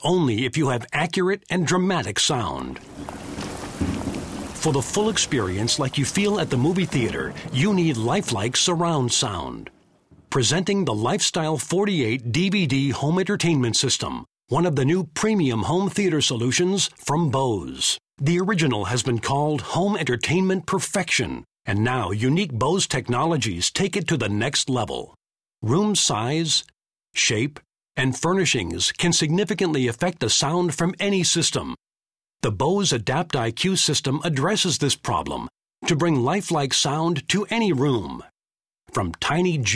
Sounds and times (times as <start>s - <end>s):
Speech: 0.0s - 2.8s, 4.6s - 9.7s, 10.3s - 31.8s, 32.4s - 39.7s.